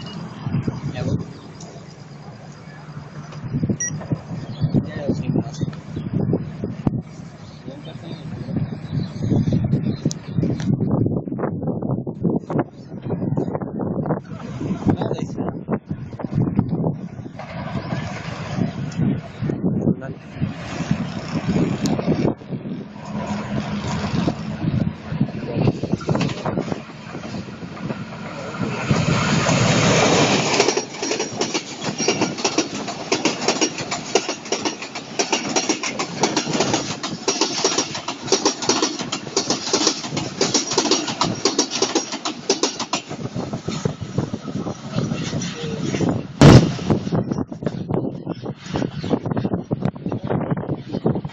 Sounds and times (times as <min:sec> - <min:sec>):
Railroad car, train wagon: 0:00.0 - 0:51.3
Train: 0:00.0 - 0:51.3
Speech: 0:00.9 - 0:01.3, 0:04.8 - 0:05.7, 0:07.7 - 0:08.3, 0:14.7 - 0:15.5, 0:19.8 - 0:20.2.